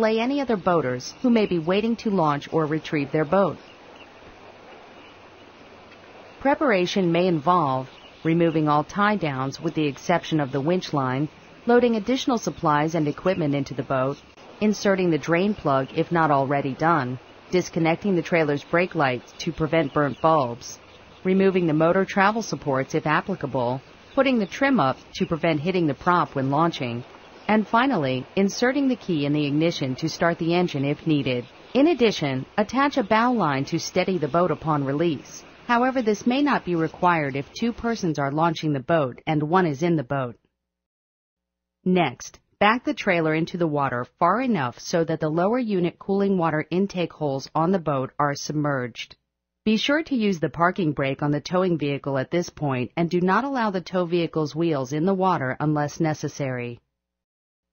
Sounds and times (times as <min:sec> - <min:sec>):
Speech: 0:00.0 - 0:03.6, 0:06.4 - 0:40.4, 0:41.9 - 0:56.8.